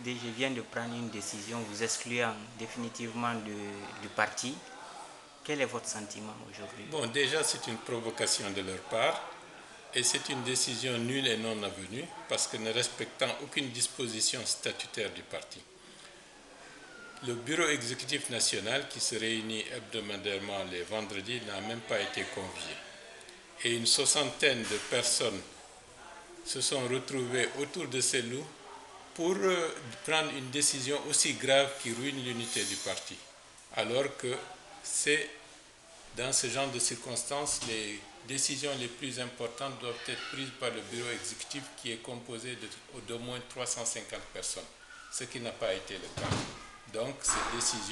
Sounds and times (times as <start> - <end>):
Speech: 0.0 - 15.7, 17.2 - 35.5, 36.1 - 47.9.